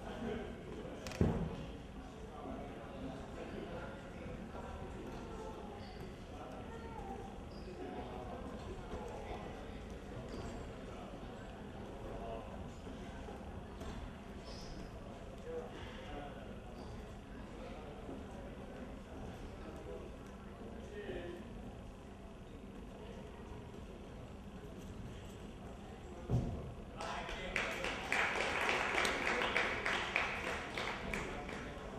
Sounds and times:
Speech: 0.0s - 31.9s.

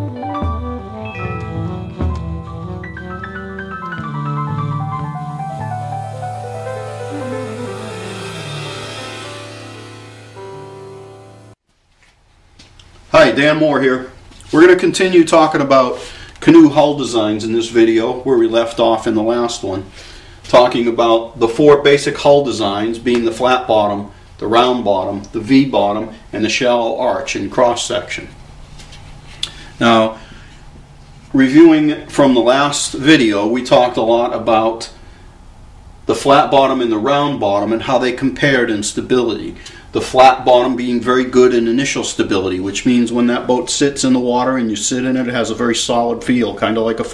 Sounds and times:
Speech: 13.1s - 19.9s, 20.5s - 28.4s, 29.8s - 30.2s, 31.3s - 35.0s, 36.1s - 47.1s.

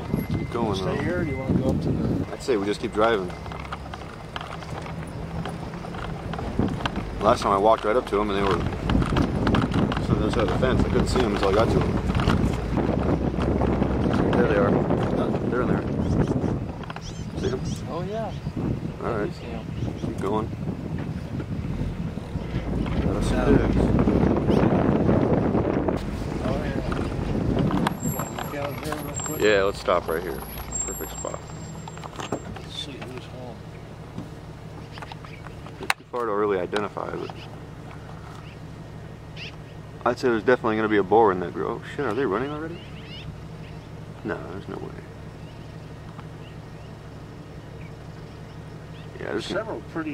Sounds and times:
Speech: 0.5s - 3.3s, 7.2s - 8.7s, 10.0s - 12.0s, 23.0s - 23.9s, 32.7s - 33.6s, 35.8s - 37.4s, 40.0s - 42.8s, 44.2s - 45.1s, 49.2s - 50.1s.

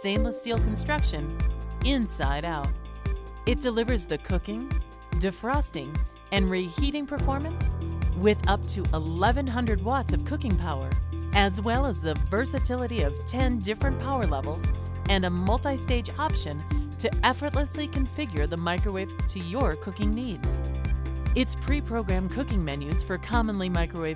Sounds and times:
Speech: 0.0s - 2.7s, 3.5s - 20.6s, 21.4s - 24.1s
Music: 0.0s - 24.1s.

